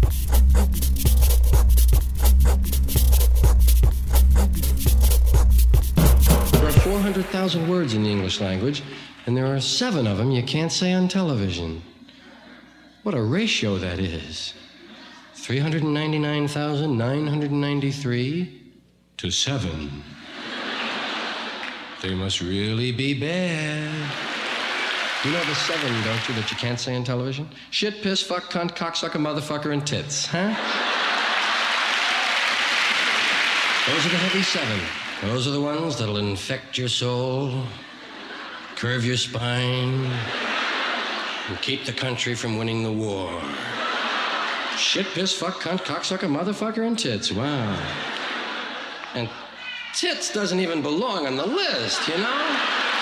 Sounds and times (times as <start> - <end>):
Music: 0.0 - 7.7
Speech: 6.6 - 11.9, 13.0 - 14.6, 15.3 - 18.6, 19.2 - 20.2, 22.0 - 24.2, 25.2 - 30.8, 33.9 - 37.8, 38.8 - 40.3, 41.5 - 43.7, 44.8 - 48.0, 49.1 - 52.7.